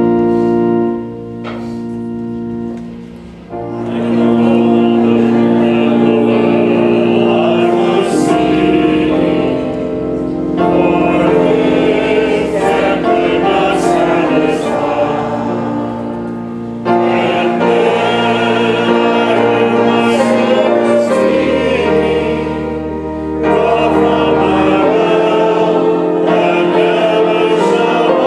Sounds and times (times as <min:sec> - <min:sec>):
Music: 0:00.0 - 0:28.2.